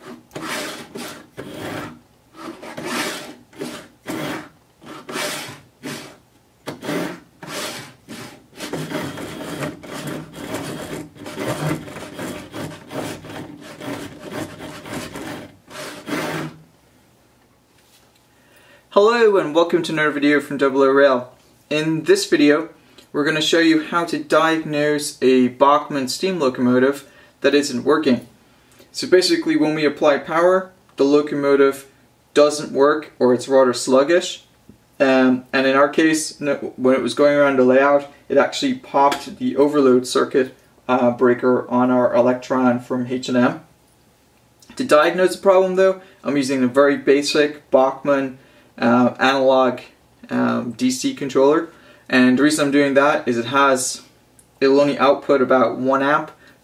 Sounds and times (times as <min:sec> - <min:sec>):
Speech: 0:18.9 - 0:28.3, 0:28.9 - 0:43.7, 0:44.7 - 0:56.4.